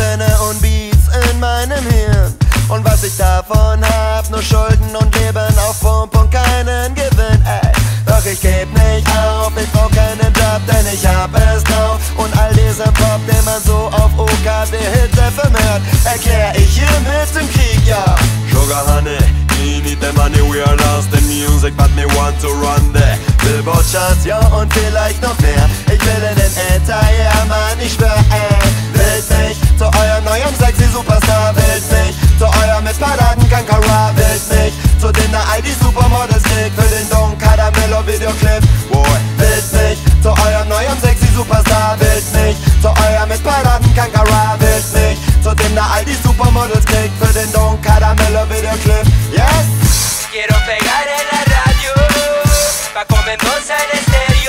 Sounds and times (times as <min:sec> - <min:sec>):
Music: 0:00.0 - 0:54.4.